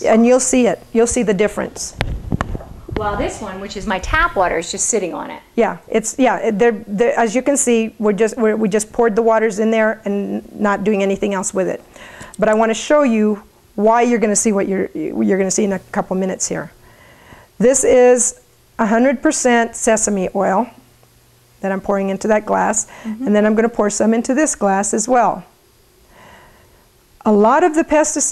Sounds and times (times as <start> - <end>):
Speech: 0.0 - 2.0, 3.0 - 11.8, 12.4 - 16.8, 27.2 - 28.3.